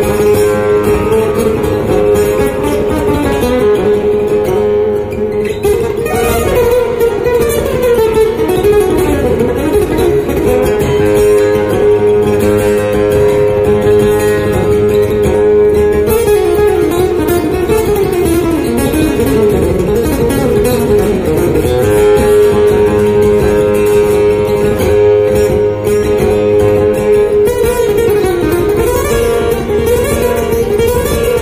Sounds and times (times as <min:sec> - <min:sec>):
Acoustic guitar: 0:00.0 - 0:31.4
Strum: 0:00.0 - 0:31.4.